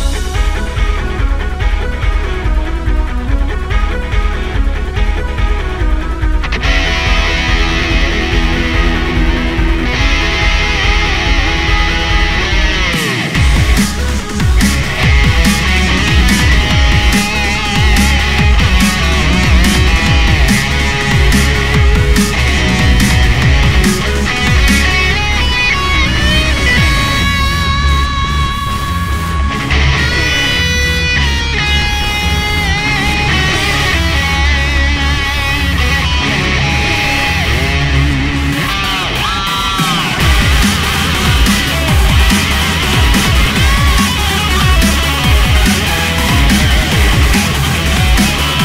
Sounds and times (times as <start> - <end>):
Music: 0.0 - 48.6.